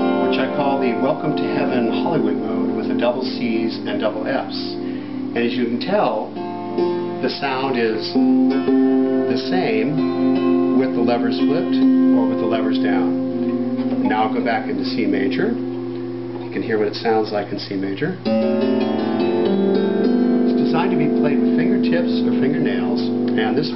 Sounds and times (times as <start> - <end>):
Music: 0.0 - 23.7
Speech: 0.3 - 4.8, 5.4 - 6.3, 7.2 - 8.2, 9.3 - 10.0, 10.8 - 13.2, 14.0 - 15.6, 16.5 - 18.3, 20.5 - 23.7.